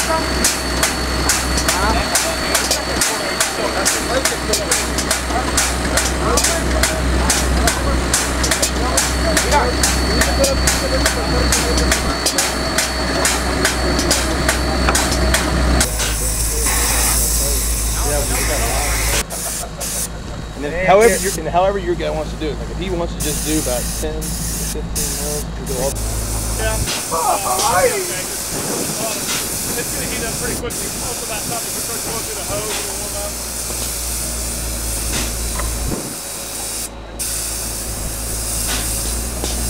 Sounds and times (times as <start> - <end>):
Speech: 0.0 - 0.5, 1.5 - 19.3, 20.4 - 26.0, 26.6 - 33.4.